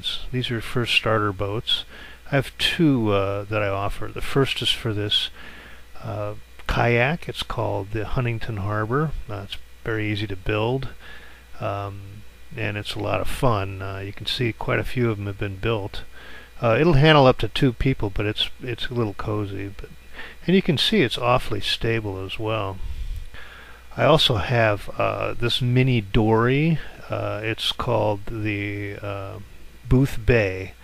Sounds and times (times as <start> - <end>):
Speech: 0.0 - 5.4, 6.0 - 11.0, 11.6 - 22.8, 23.9 - 30.8.